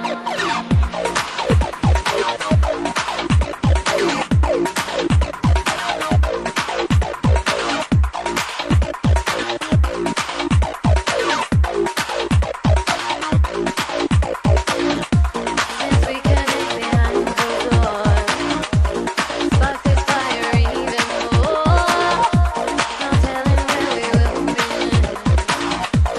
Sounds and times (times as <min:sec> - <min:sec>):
Trance music: 0:00.0 - 0:26.1.